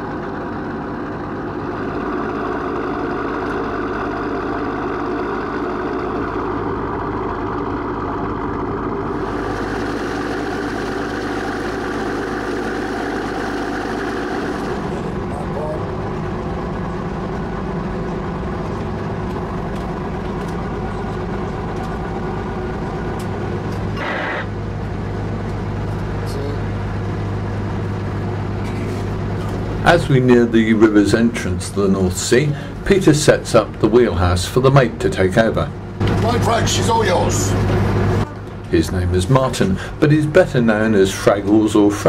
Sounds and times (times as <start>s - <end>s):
Ship: 0.0s - 42.0s.